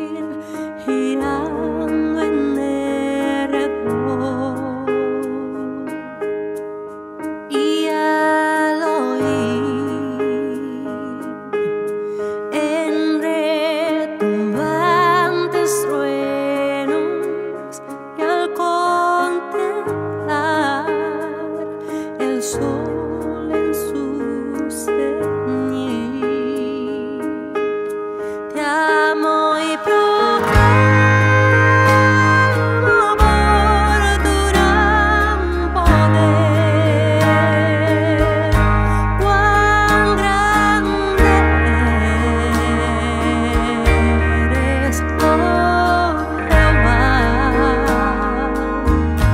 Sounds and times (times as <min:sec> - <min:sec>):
Music: 0:00.0 - 0:49.3.